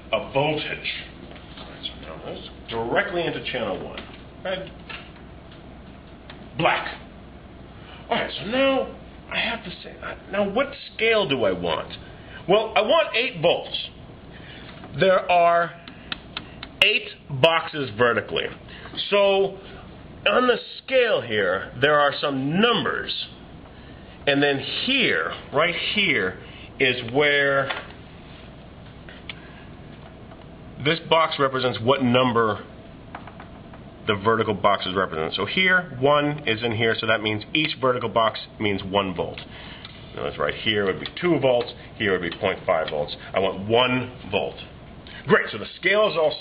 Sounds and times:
Speech: 0.1s - 4.8s, 6.6s - 7.1s, 8.1s - 14.0s, 14.9s - 15.8s, 16.8s - 19.6s, 20.2s - 23.4s, 24.2s - 27.8s, 30.8s - 32.7s, 34.0s - 39.5s, 40.1s - 46.4s.

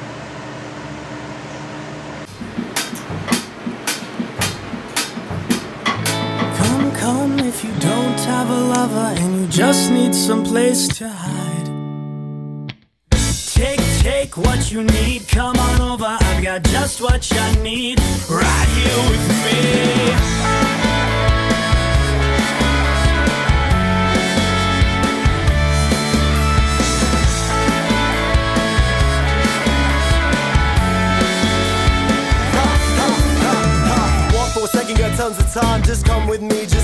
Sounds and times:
Music: 2.3s - 36.8s.

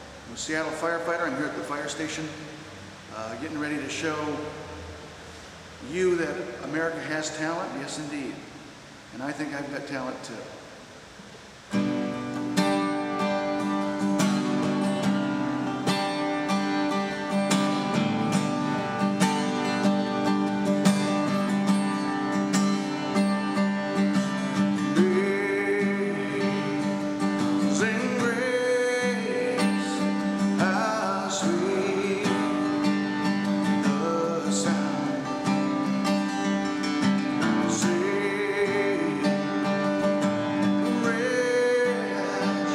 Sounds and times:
Music: 11.7s - 42.7s
Male singing: 24.9s - 32.9s, 33.8s - 35.6s, 37.6s - 39.7s, 40.9s - 42.7s.

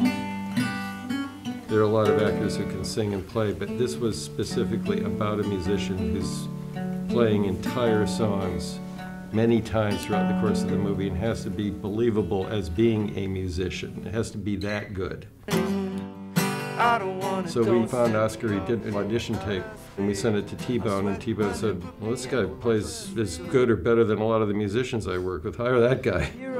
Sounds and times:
Music: 0.0s - 14.6s, 15.4s - 25.4s, 26.0s - 26.5s
Speech: 1.7s - 6.5s, 7.1s - 8.8s, 9.4s - 16.0s, 17.4s - 26.5s.

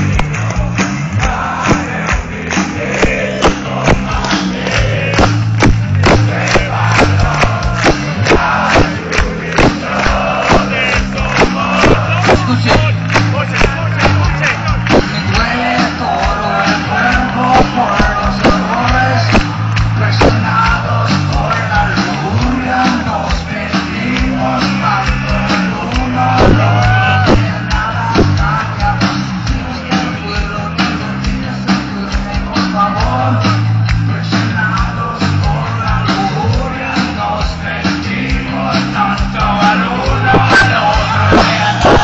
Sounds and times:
Music: 0.0s - 42.0s
Male singing: 6.3s - 19.4s, 20.0s - 42.0s.

